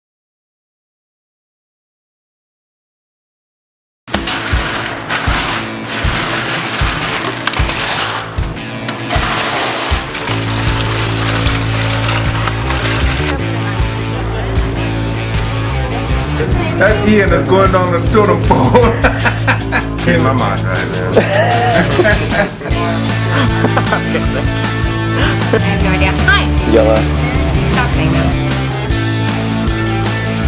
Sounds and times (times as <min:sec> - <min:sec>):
Music: 0:04.1 - 0:30.4.